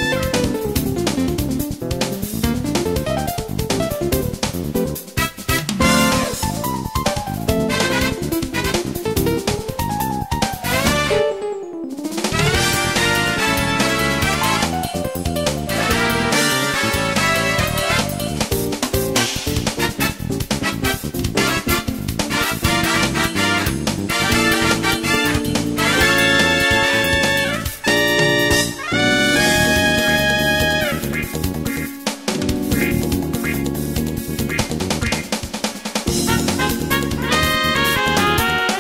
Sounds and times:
Music: 0:00.0 - 0:38.8.

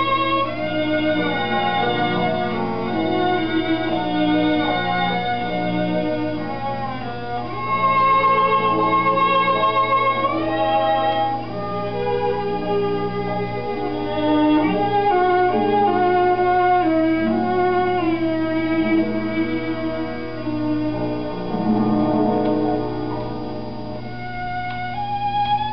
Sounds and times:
Violin, fiddle: 0:00.0 - 0:25.7.

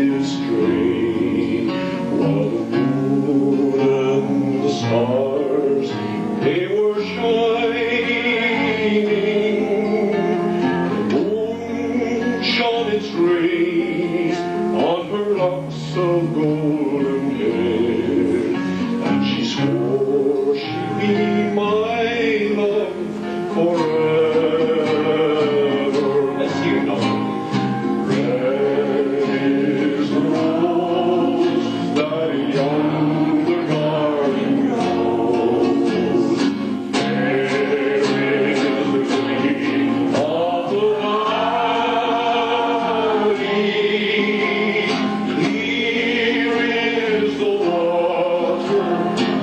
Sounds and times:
Singing: 0:00.0 - 0:27.3, 0:28.0 - 0:49.4
Inside, large room or hall: 0:00.0 - 0:49.4
Musical instrument: 0:00.0 - 0:49.4.

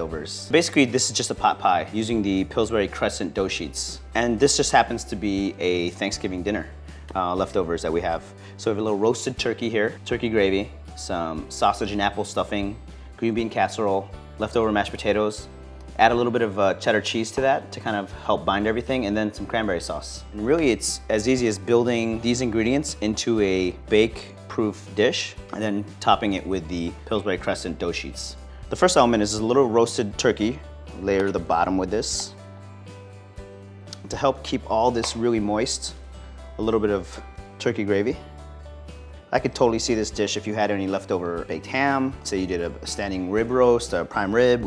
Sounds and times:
Speech: 0:00.0 - 0:32.4, 0:34.0 - 0:36.0, 0:36.6 - 0:38.2, 0:39.3 - 0:44.6
Music: 0:00.0 - 0:44.6.

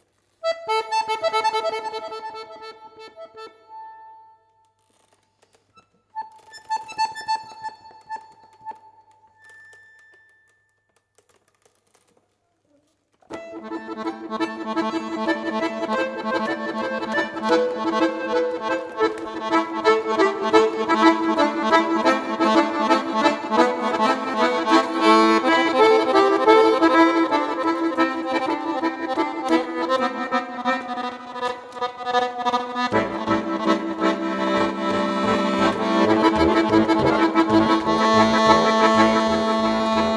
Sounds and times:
Accordion: 0:00.3 - 0:04.6, 0:05.4 - 0:10.1, 0:13.3 - 0:40.1.

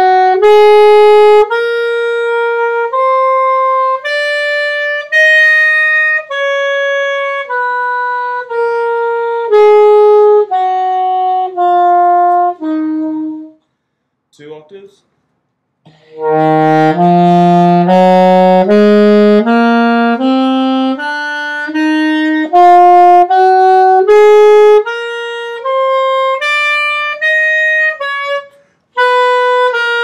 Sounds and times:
Wind instrument, woodwind instrument: 0:00.0 - 0:13.6, 0:15.9 - 0:30.0.

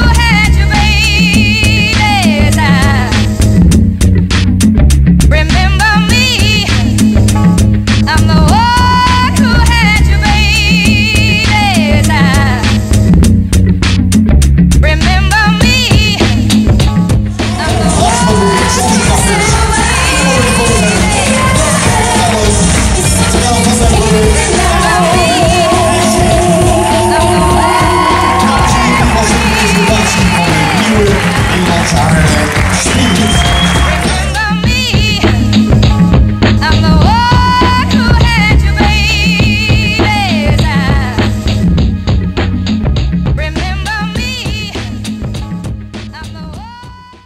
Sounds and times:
Pop music: 0:00.0 - 0:47.2
Singing: 0:17.3 - 0:35.6.

